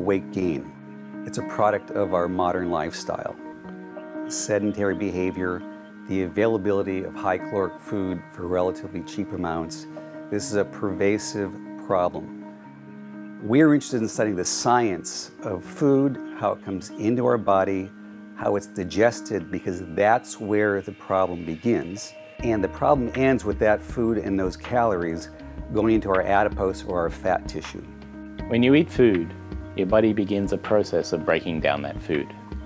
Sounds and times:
Speech: 0.0 - 3.4, 4.3 - 12.3, 13.4 - 27.9, 28.5 - 32.4
Music: 0.0 - 32.6.

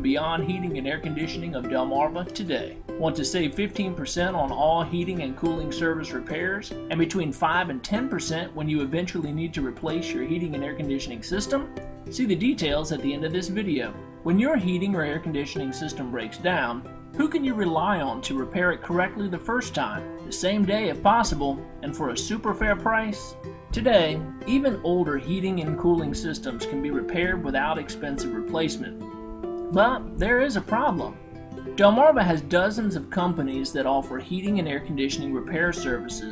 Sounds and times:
Speech: 0.0 - 29.0, 29.7 - 31.2, 31.8 - 36.3
Music: 0.0 - 36.3.

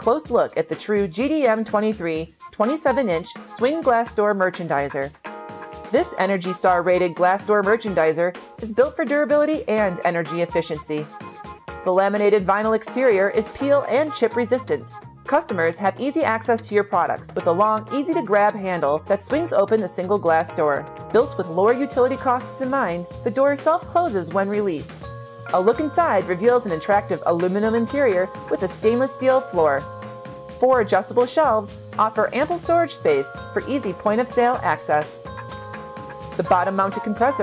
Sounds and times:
Speech: 0.0 - 5.1, 5.9 - 11.1, 11.9 - 29.9, 30.6 - 35.3, 36.4 - 37.4
Music: 0.0 - 37.4.

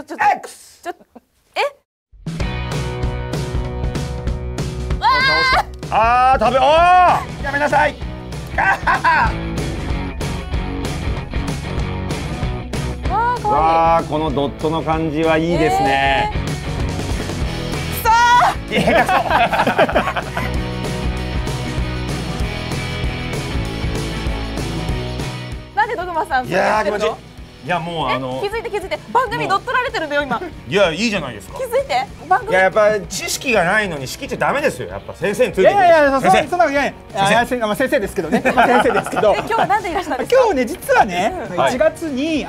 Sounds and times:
Music: 2.1 - 42.4.

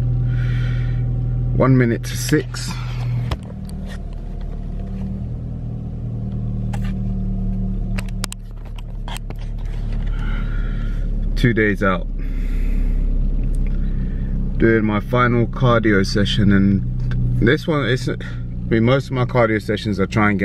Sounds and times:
Outside, urban or manmade: 0.0 - 20.4
Speech: 1.6 - 2.8, 11.4 - 12.1, 14.6 - 16.8, 17.4 - 20.4.

